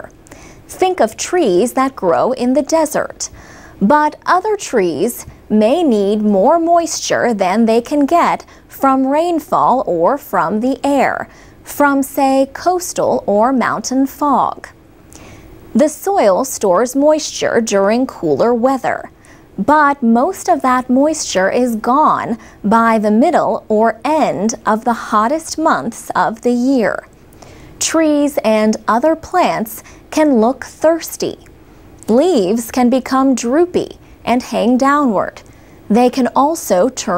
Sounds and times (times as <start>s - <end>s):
Speech: 0.0s - 14.8s, 15.8s - 27.1s, 27.8s - 37.1s.